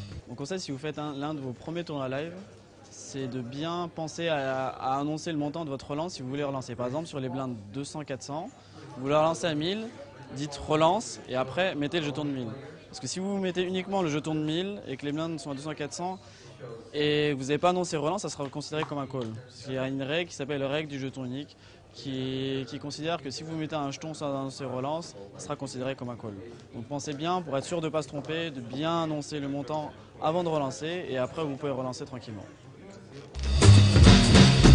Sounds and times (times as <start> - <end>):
Speech: 0.0 - 33.4.